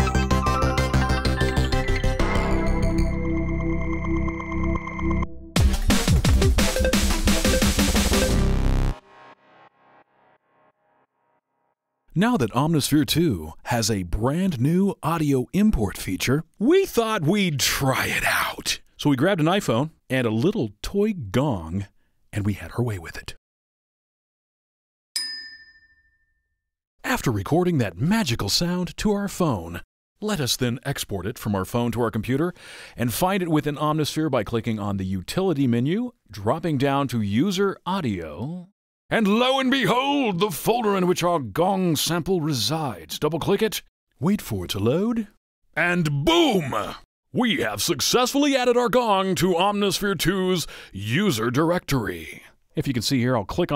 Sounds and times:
Speech: 12.1s - 23.4s, 27.0s - 53.7s.

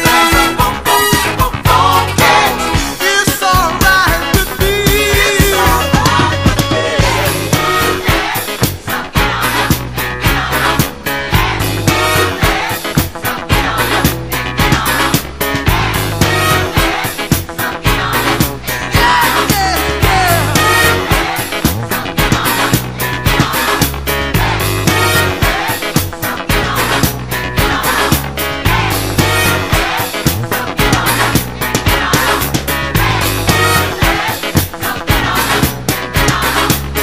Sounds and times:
Music: 0.0s - 37.0s.

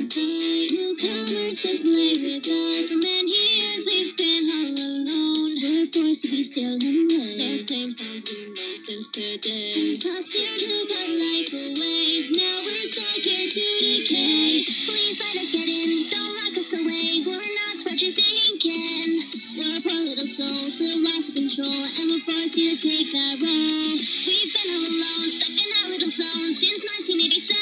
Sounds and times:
Music: 0.0s - 27.6s.

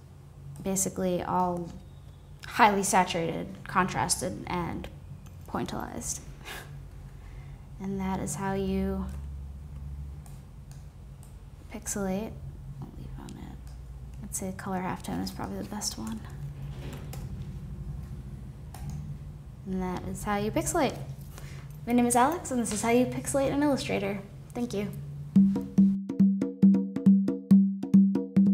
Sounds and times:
Inside, small room: 0.0s - 28.5s
Speech: 0.6s - 1.8s, 2.5s - 4.9s, 5.5s - 6.2s, 7.8s - 9.2s, 11.7s - 13.6s, 14.2s - 16.4s, 19.7s - 21.1s, 21.9s - 25.0s.

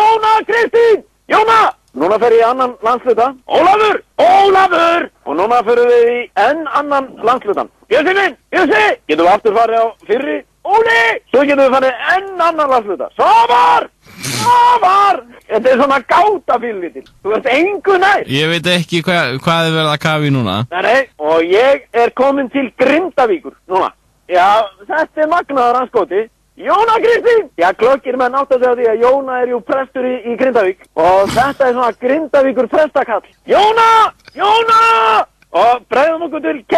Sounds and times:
Speech: 0.0s - 13.9s, 14.5s - 36.7s.

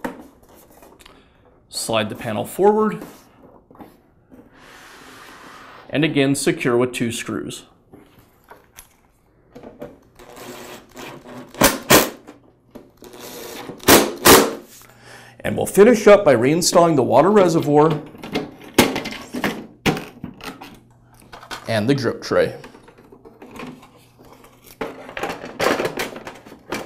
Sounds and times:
Speech: 1.7s - 3.1s, 5.9s - 7.7s, 15.4s - 18.0s, 21.6s - 22.7s.

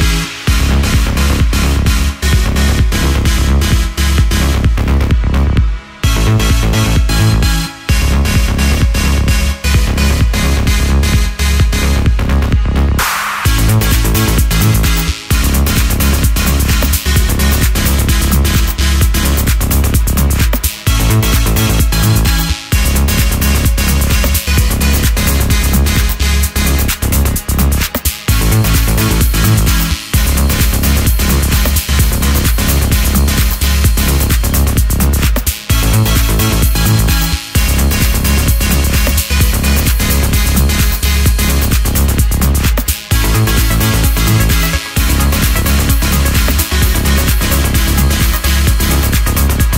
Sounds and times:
Music: 0.0s - 49.7s.

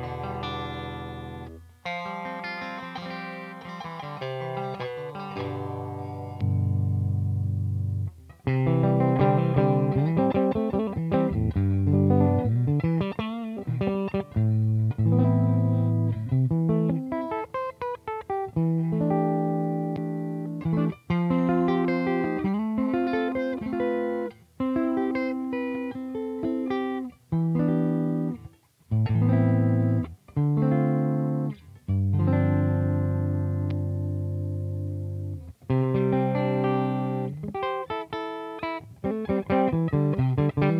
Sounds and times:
Tapping (guitar technique): 0.0s - 40.7s.

